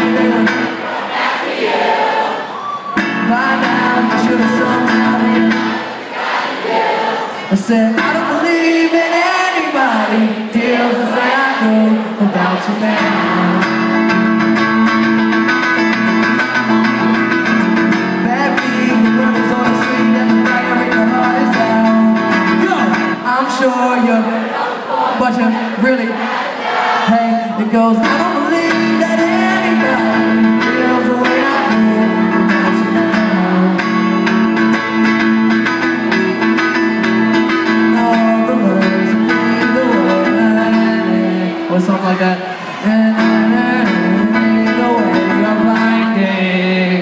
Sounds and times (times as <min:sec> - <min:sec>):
Male singing: 0:00.0 - 0:00.8, 0:03.1 - 0:05.8, 0:07.5 - 0:13.8, 0:18.2 - 0:24.4, 0:27.0 - 0:33.9, 0:37.9 - 0:47.0
Music: 0:00.0 - 0:00.9, 0:02.9 - 0:06.0, 0:12.5 - 0:23.5, 0:27.4 - 0:47.0.